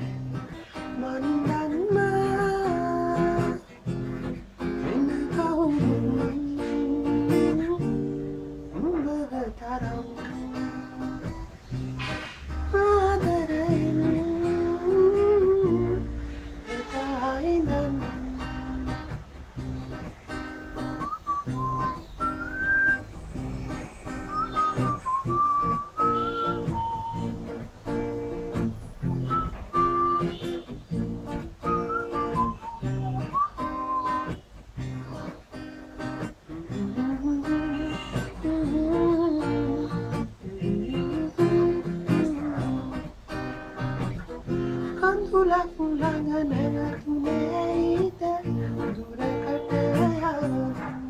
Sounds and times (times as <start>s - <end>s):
Whistling: 19.8s - 51.0s.